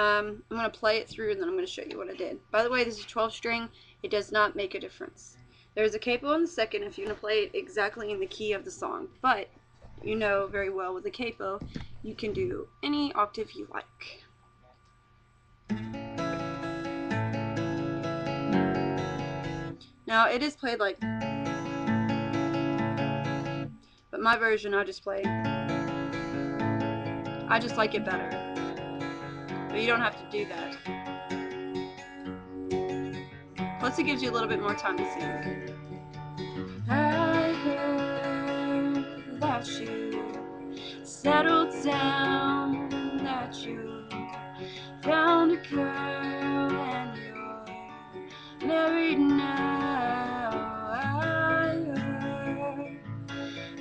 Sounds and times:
Speech: 0.0s - 14.2s, 20.1s - 21.0s, 24.2s - 25.3s, 27.5s - 28.3s, 29.8s - 30.8s, 33.8s - 35.5s
Acoustic guitar: 15.6s - 53.8s.

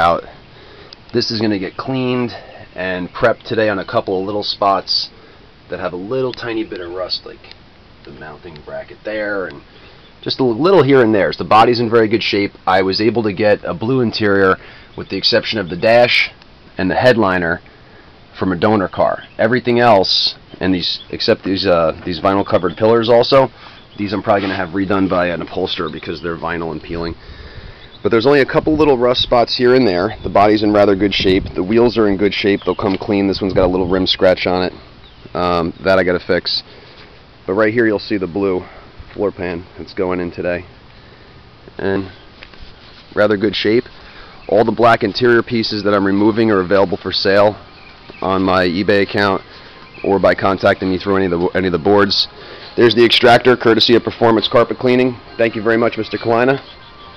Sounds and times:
Speech: 0.0s - 0.3s, 1.1s - 5.1s, 5.7s - 9.6s, 10.2s - 17.6s, 18.4s - 27.2s, 28.0s - 36.7s, 37.5s - 40.7s, 41.8s - 42.2s, 43.1s - 43.9s, 44.5s - 47.6s, 48.2s - 56.7s.

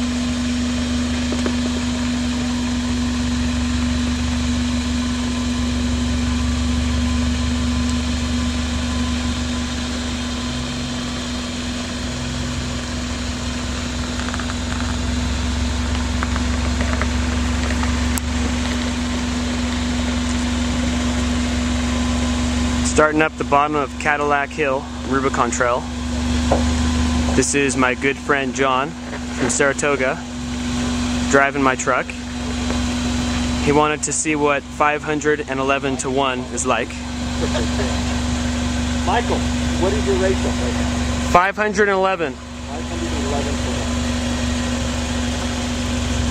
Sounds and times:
Truck: 0.0s - 46.3s
Speech: 22.8s - 25.9s, 27.4s - 30.2s, 31.3s - 32.2s, 33.6s - 38.1s, 39.0s - 44.0s.

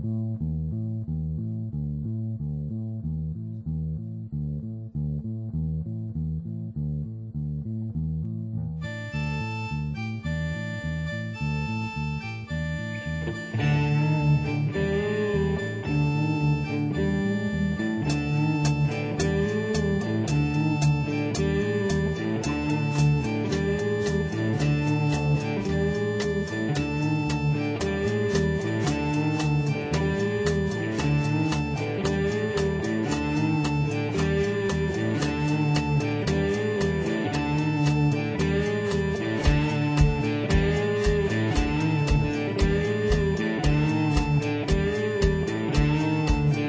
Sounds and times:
Psychedelic rock: 16.8s - 46.6s.

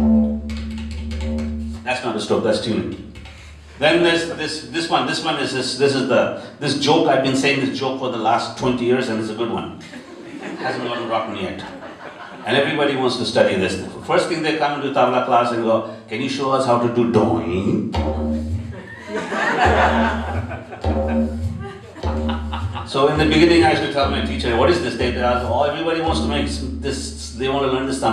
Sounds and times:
Male speech, man speaking: 1.9s - 3.0s, 3.8s - 9.8s, 10.6s - 11.8s, 12.4s - 18.0s, 22.9s - 28.1s
Chuckle, chortle: 9.8s - 12.4s, 18.8s - 22.9s.

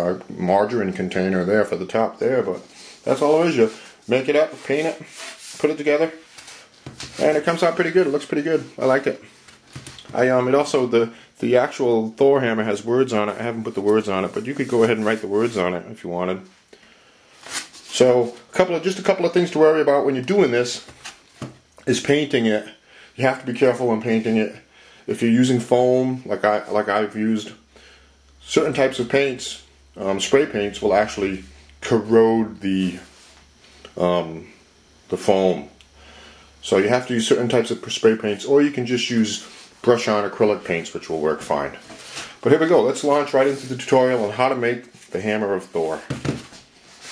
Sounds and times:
Speech: 0.0s - 6.2s, 7.1s - 9.3s, 10.0s - 16.5s, 17.9s - 20.9s, 21.8s - 27.6s, 28.4s - 33.2s, 33.8s - 35.8s, 36.6s - 46.2s
Inside, small room: 0.0s - 47.1s.

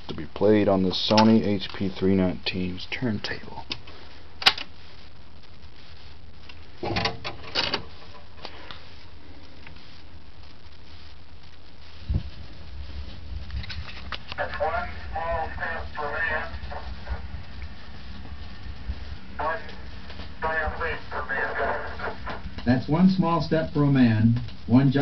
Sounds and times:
Speech: 0.1s - 3.7s, 14.3s - 17.2s, 19.4s - 19.8s, 20.4s - 25.0s.

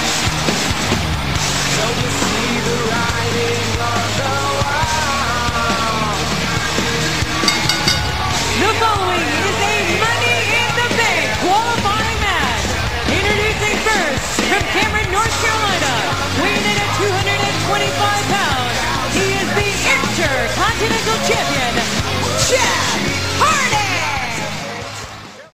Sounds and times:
Music: 0.0s - 9.6s, 11.8s - 25.5s.

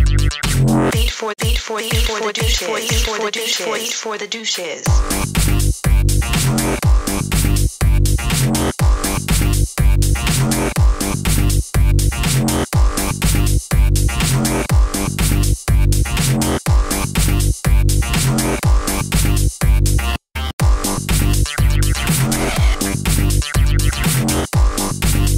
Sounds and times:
Pop music: 0.3s - 5.6s, 21.5s - 23.2s
Speech: 0.9s - 5.0s.

